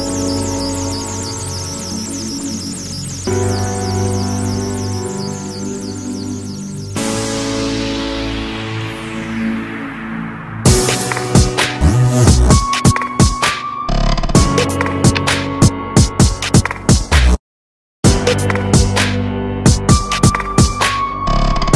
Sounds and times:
Dubstep: 8.5s - 12.9s.

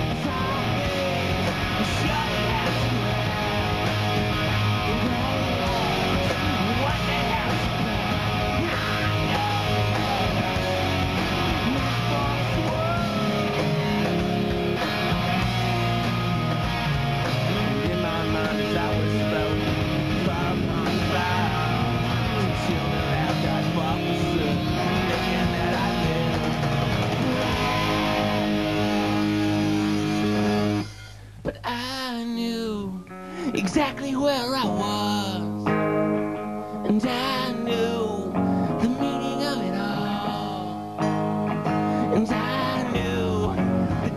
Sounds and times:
Singing: 0.0s - 4.0s, 4.8s - 13.9s, 17.5s - 35.6s, 36.8s - 40.9s, 42.0s - 44.1s.

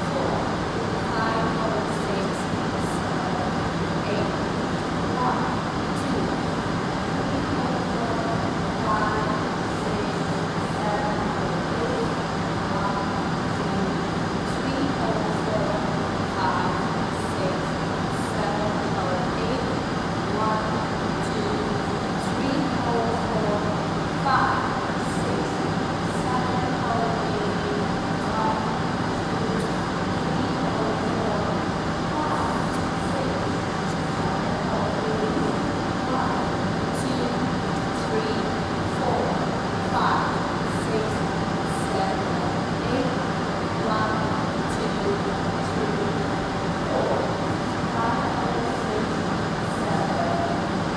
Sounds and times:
Speech: 0.0s - 50.8s.

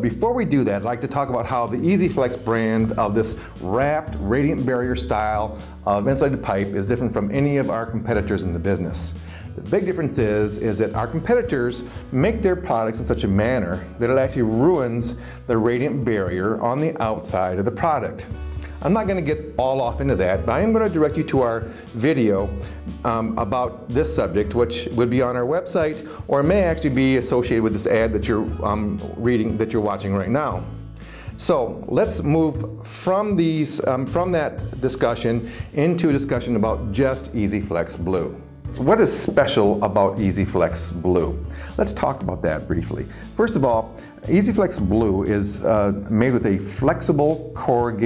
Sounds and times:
Speech: 0.0s - 30.7s, 31.4s - 48.0s
Music: 0.0s - 48.0s.

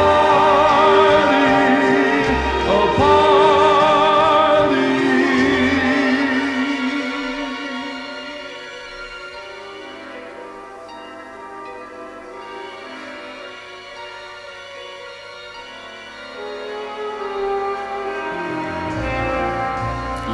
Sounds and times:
Singing: 0.0s - 8.8s
Music: 0.0s - 20.3s.

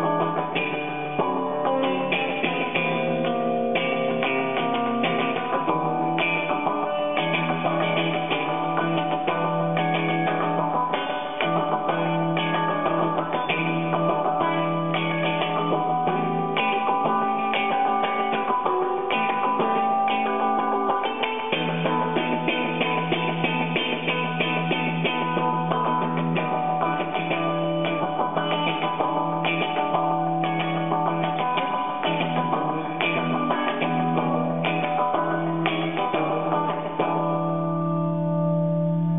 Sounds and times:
Effects unit: 0.0s - 39.1s
Guitar: 0.0s - 39.1s.

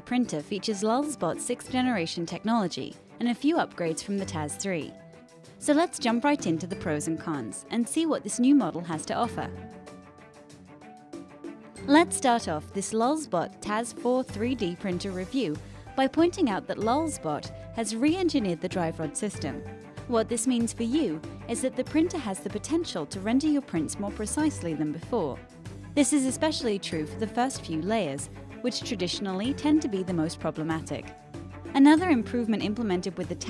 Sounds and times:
Speech: 0.0s - 5.0s, 5.6s - 9.5s, 11.8s - 25.4s, 26.0s - 31.1s, 31.8s - 33.4s
Music: 0.0s - 33.4s.

